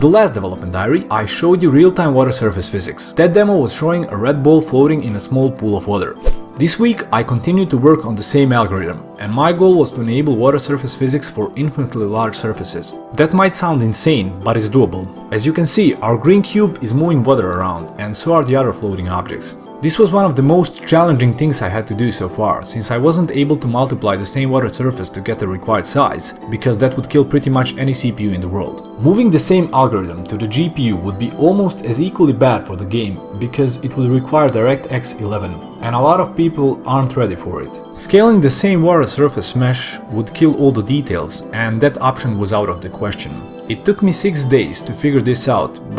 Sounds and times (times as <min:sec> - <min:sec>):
Music: 0:00.0 - 0:45.9
Speech: 0:00.0 - 0:45.9.